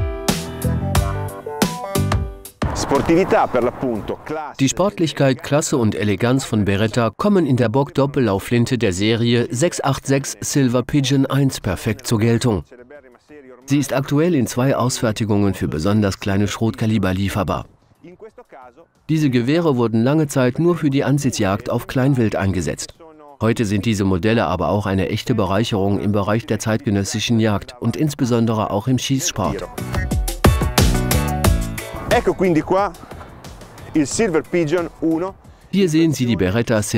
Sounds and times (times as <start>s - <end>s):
Speech: 2.7s - 29.7s, 32.1s - 33.0s, 33.9s - 36.9s.